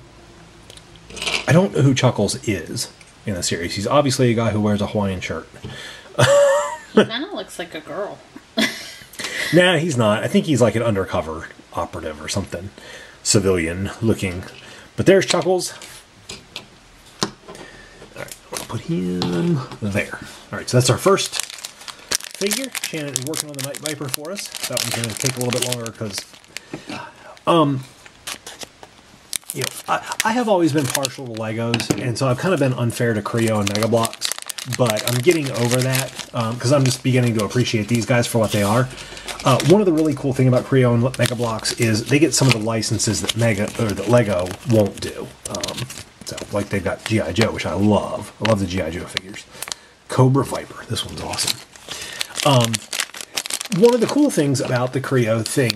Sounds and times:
Speech: 0:01.5 - 0:05.5, 0:07.0 - 0:08.2, 0:09.5 - 0:15.9, 0:18.2 - 0:21.4, 0:22.4 - 0:26.3, 0:27.4 - 0:27.9, 0:29.6 - 0:49.5, 0:50.1 - 0:51.6, 0:52.4 - 0:52.9, 0:53.7 - 0:55.7
Crumpling, crinkling: 0:20.8 - 0:49.9, 0:50.5 - 0:55.7.

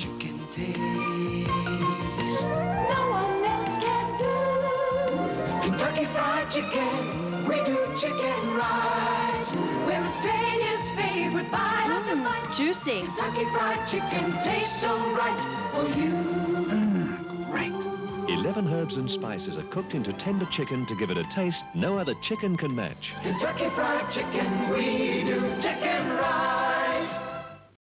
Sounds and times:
Music: 0:00.0 - 0:27.8
Speech: 0:17.5 - 0:23.2.

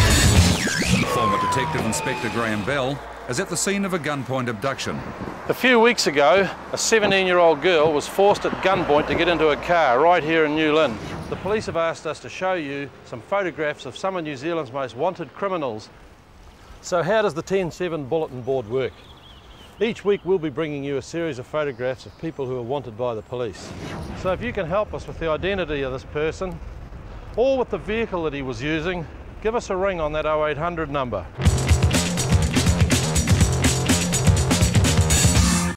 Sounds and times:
Music: 0:00.0 - 0:01.0, 0:31.4 - 0:35.7
Speech: 0:01.0 - 0:15.9, 0:16.8 - 0:19.0, 0:19.8 - 0:26.6, 0:27.4 - 0:31.4.

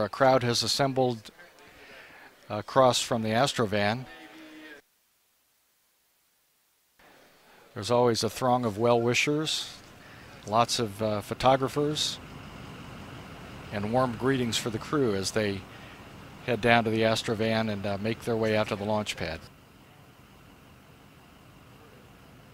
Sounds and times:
Speech: 0:00.0 - 0:04.8, 0:07.7 - 0:09.8, 0:10.4 - 0:12.2, 0:13.7 - 0:15.7, 0:16.5 - 0:19.5.

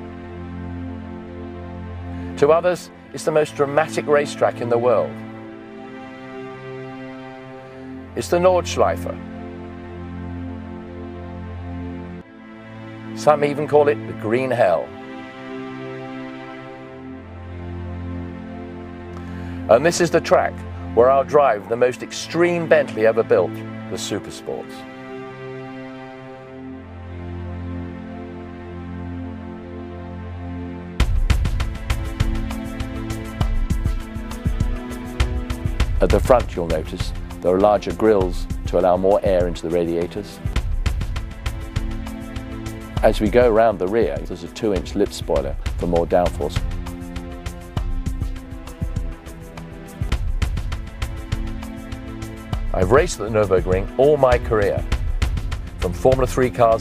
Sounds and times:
Music: 0:00.0 - 0:56.8
Speech: 0:02.4 - 0:05.2, 0:08.2 - 0:09.2, 0:13.2 - 0:15.0, 0:19.7 - 0:24.8, 0:36.0 - 0:40.4, 0:43.0 - 0:46.6, 0:52.7 - 0:54.8, 0:55.8 - 0:56.8.

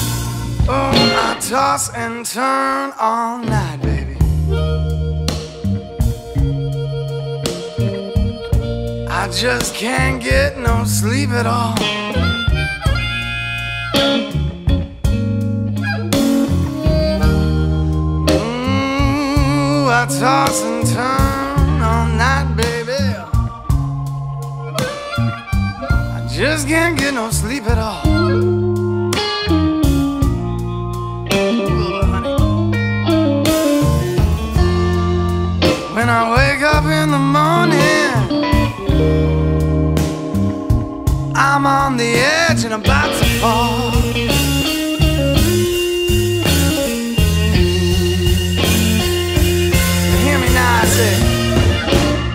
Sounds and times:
Guitar: 0:00.0 - 0:52.3.

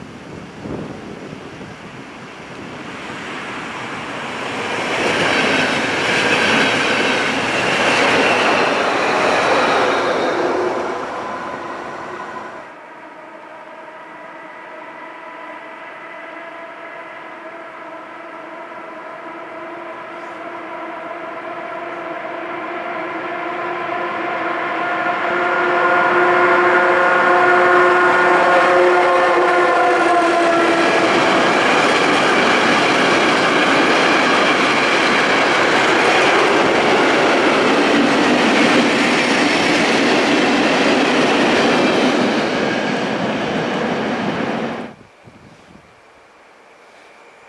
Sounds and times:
Railroad car, train wagon: 0:00.0 - 0:47.4
Train: 0:00.0 - 0:47.4
Train wheels squealing: 0:04.3 - 0:12.6.

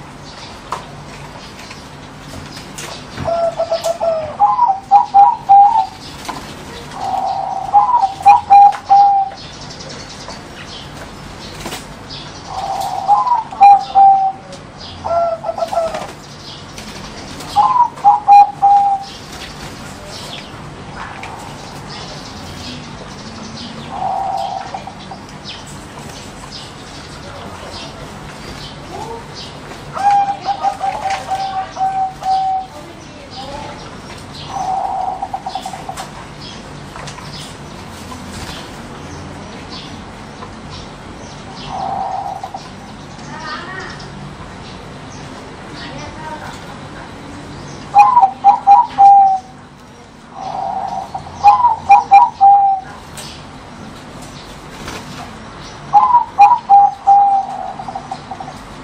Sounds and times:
Coo: 0:07.0 - 0:09.3, 0:12.6 - 0:14.4, 0:17.6 - 0:19.1, 0:50.4 - 0:52.9, 0:56.0 - 0:58.4.

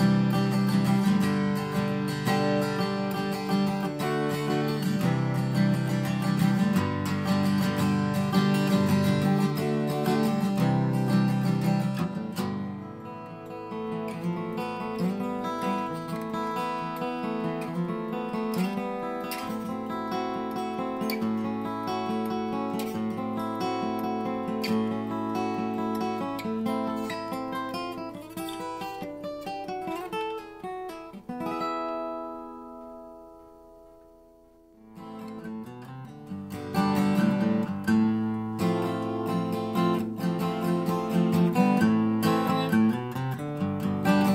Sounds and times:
Music: 0:00.0 - 0:44.3.

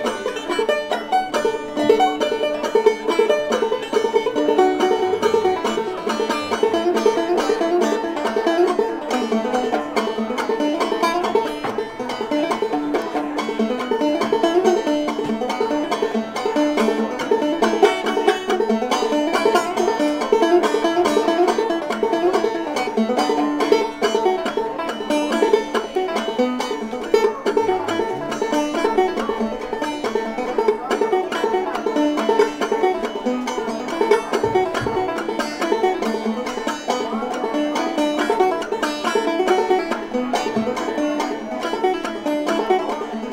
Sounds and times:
Banjo: 0:00.0 - 0:43.3
Guitar: 0:00.0 - 0:43.3
Speech: 0:00.0 - 0:43.3.

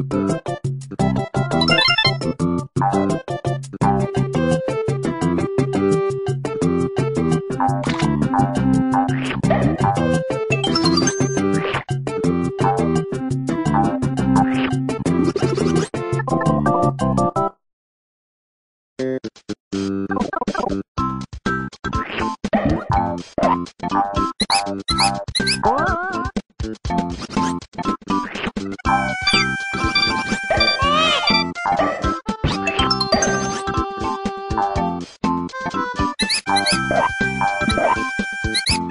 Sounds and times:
Sound effect: 0:01.5 - 0:02.4, 0:10.6 - 0:11.9, 0:14.4 - 0:16.0, 0:22.0 - 0:26.3, 0:27.1 - 0:33.6, 0:36.2 - 0:38.9.

